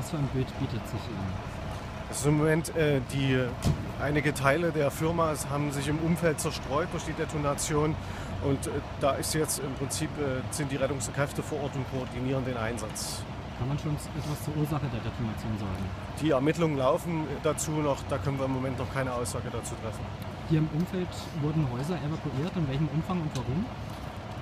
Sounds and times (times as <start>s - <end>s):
Speech: 0.0s - 1.4s, 2.1s - 23.7s.